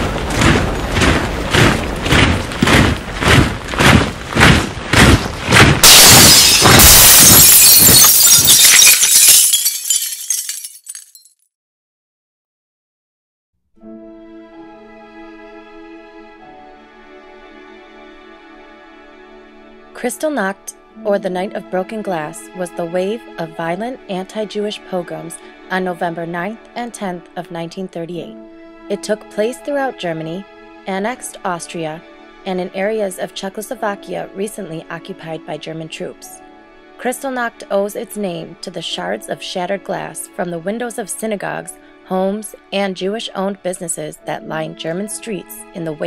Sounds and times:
Music: 13.7 - 46.0
Speech: 20.0 - 36.4, 37.0 - 46.0.

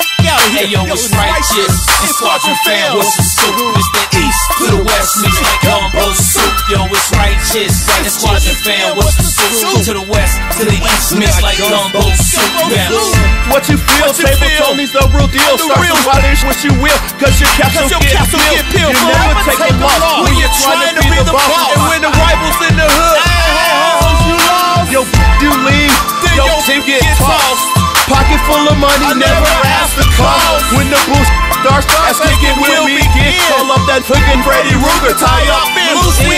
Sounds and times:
Blues: 0.0 - 36.3.

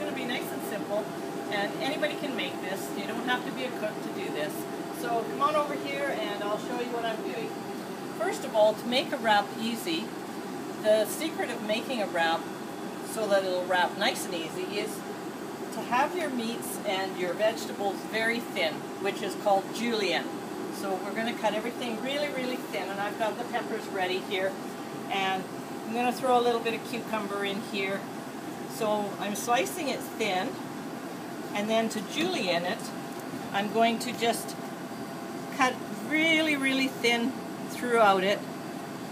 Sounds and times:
Speech: 0.0 - 7.5, 8.2 - 10.1, 10.8 - 12.4, 13.1 - 15.0, 15.7 - 28.1, 28.7 - 30.6, 31.6 - 33.0, 33.6 - 34.6, 35.6 - 38.4.

